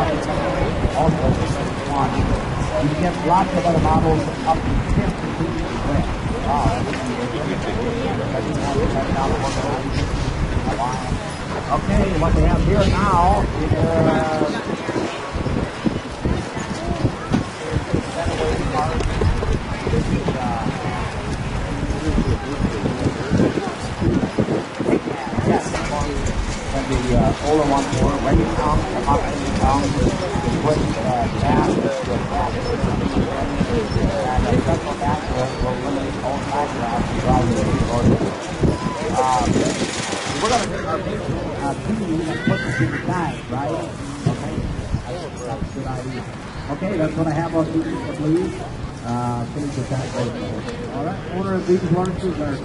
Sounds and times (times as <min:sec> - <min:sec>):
Speech: 0:00.0 - 0:15.4, 0:16.2 - 0:52.6.